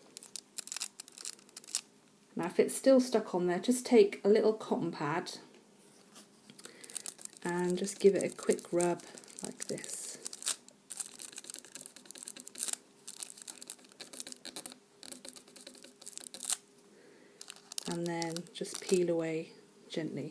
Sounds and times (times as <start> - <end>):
Crumpling, crinkling: 0.0 - 1.9, 6.5 - 16.6, 17.4 - 19.1
Inside, small room: 0.0 - 20.3
Speech: 2.4 - 5.5, 7.4 - 10.2, 17.9 - 20.3.